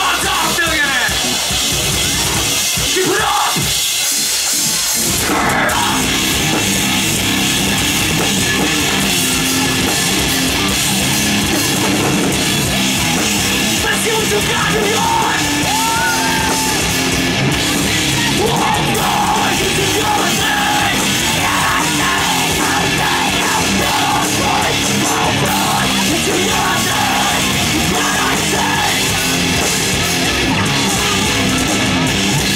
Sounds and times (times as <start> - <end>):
Music: 0.0 - 32.5.